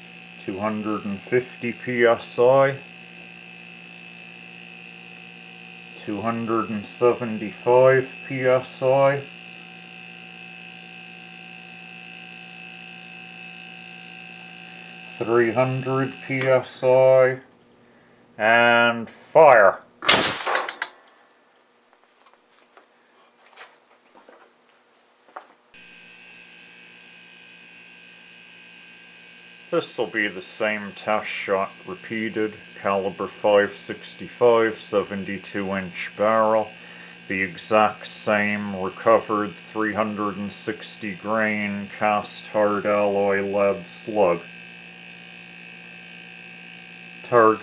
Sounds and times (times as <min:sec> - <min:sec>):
Hum: 0:00.0 - 0:22.0, 0:25.7 - 0:47.6
Mains hum: 0:00.0 - 0:47.6.